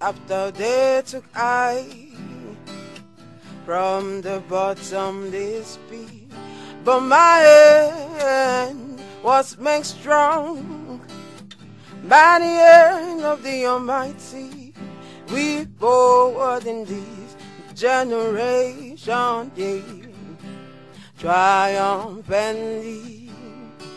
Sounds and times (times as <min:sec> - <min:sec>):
Music: 0:00.0 - 0:23.9.